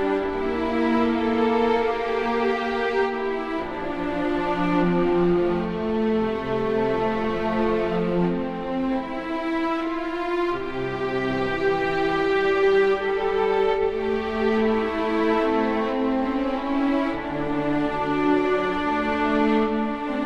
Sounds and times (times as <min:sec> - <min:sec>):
String section: 0:00.0 - 0:20.2.